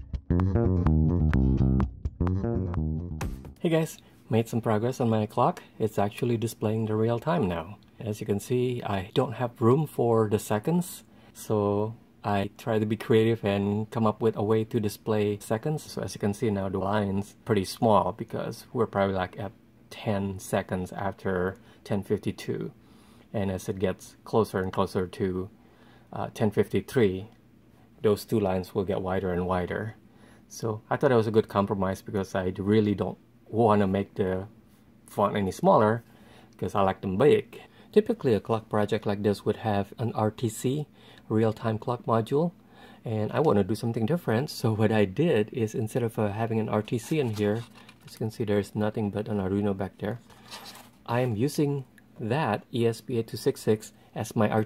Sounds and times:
Speech: 3.6 - 27.4, 28.0 - 54.6.

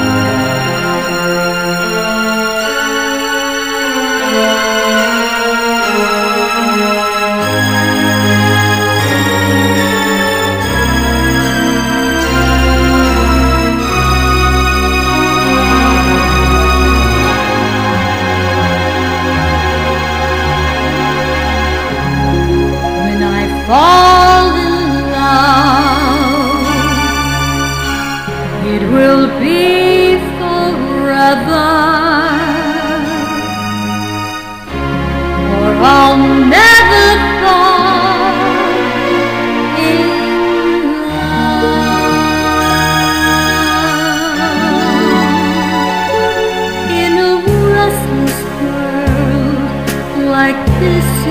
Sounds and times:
Music: 0.0 - 51.3
Female singing: 23.0 - 27.0, 28.6 - 33.2, 35.5 - 38.8, 39.8 - 42.5, 46.9 - 51.3.

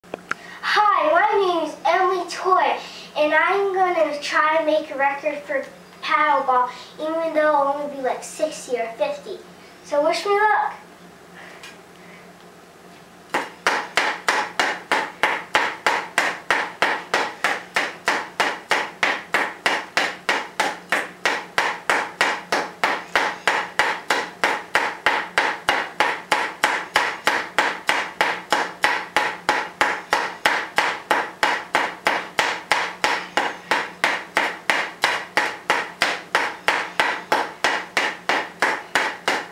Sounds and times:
Inside, small room: 0.0 - 39.5
Child speech, kid speaking: 0.6 - 10.8.

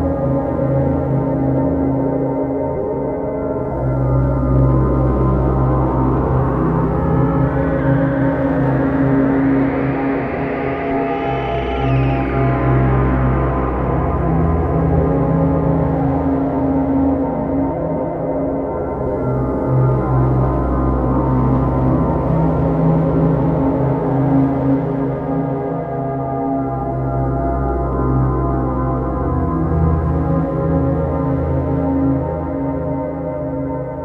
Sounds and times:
Ambient music: 0.0 - 34.0
Scary music: 0.0 - 34.0.

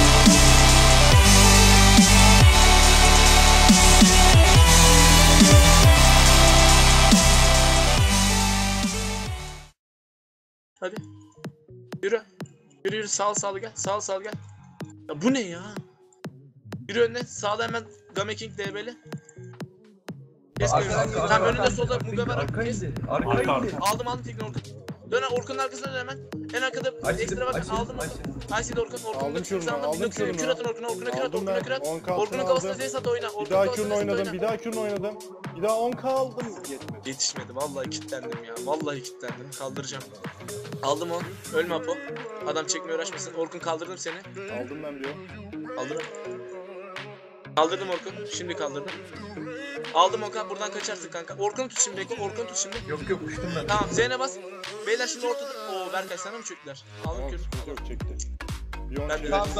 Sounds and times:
Music: 0.0 - 9.8, 10.8 - 59.5
Speech: 10.8 - 11.1, 12.0 - 14.4, 15.1 - 15.8, 16.9 - 19.0, 20.6 - 40.2, 40.8 - 46.2, 47.6 - 49.0, 50.0 - 58.3, 58.9 - 59.5.

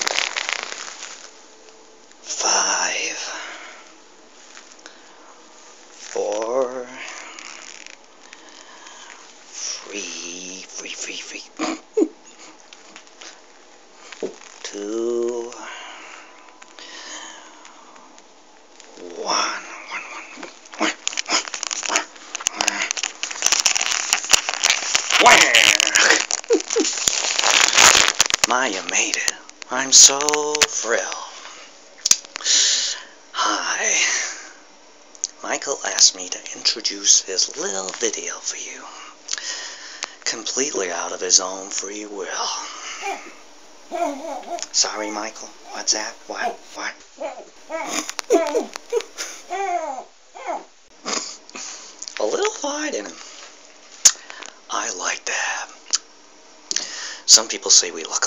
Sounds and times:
Inside, small room: 0.0 - 58.2
Speech: 2.3 - 3.6, 6.0 - 7.3, 9.6 - 11.8, 14.6 - 15.8, 18.9 - 21.0, 25.2 - 26.2, 28.5 - 31.4, 32.5 - 34.5, 35.3 - 39.1, 40.2 - 43.3, 43.9 - 47.0, 52.1 - 53.2, 54.7 - 55.8, 57.3 - 58.2.

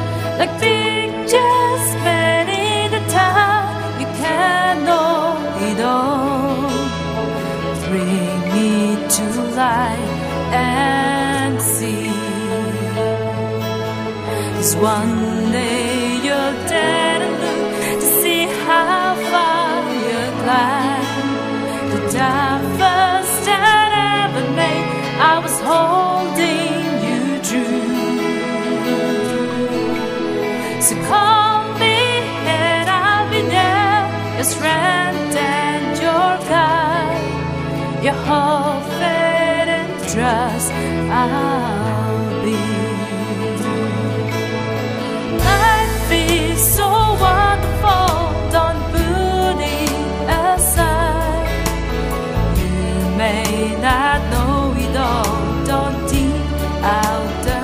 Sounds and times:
Music: 0.0 - 57.6.

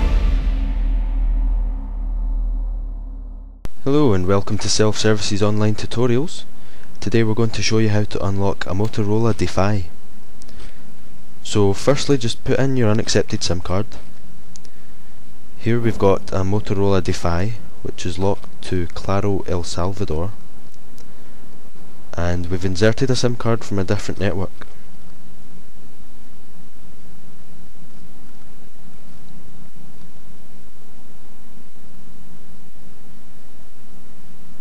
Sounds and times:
Speech: 3.8 - 10.0, 11.4 - 14.1, 15.6 - 20.4, 22.1 - 24.6.

